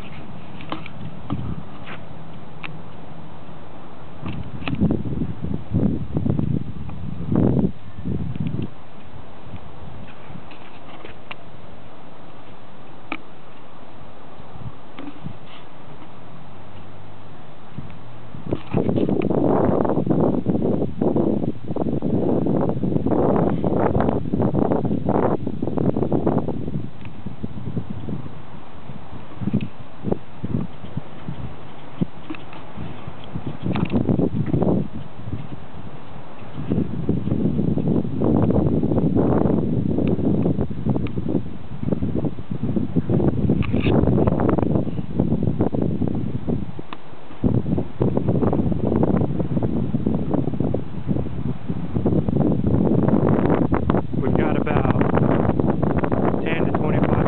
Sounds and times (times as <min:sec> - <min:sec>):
Wind noise (microphone): 0:00.0 - 0:11.6, 0:14.4 - 0:57.2.